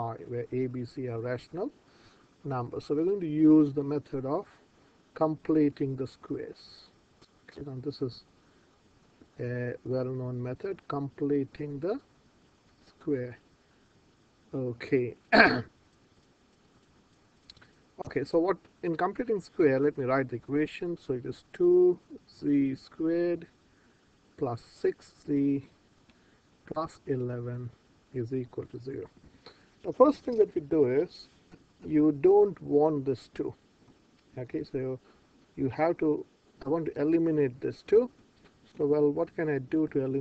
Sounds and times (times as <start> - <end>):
Speech: 0.0 - 1.8, 2.4 - 4.6, 5.2 - 8.3, 9.4 - 12.1, 12.8 - 13.4, 14.5 - 15.7, 18.0 - 23.5, 24.4 - 25.8, 26.7 - 29.1, 29.8 - 33.6, 34.3 - 35.0, 35.6 - 40.2.